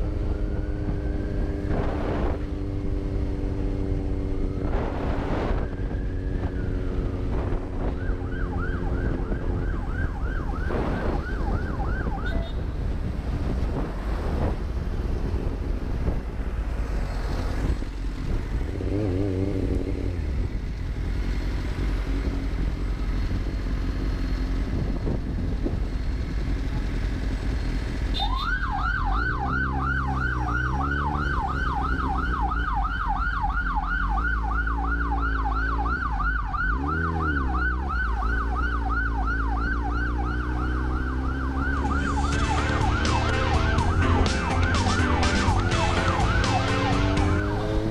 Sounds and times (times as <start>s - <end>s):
Motorcycle: 0.0s - 47.9s.